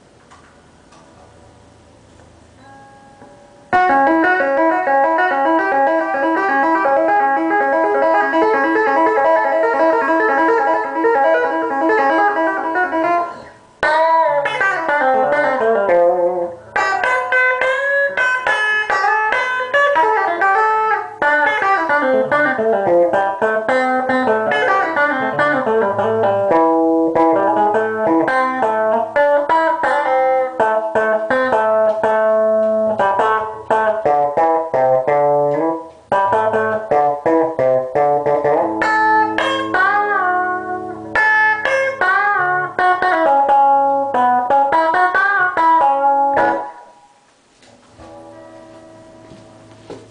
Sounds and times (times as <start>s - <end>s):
Acoustic guitar: 18.2s - 50.1s.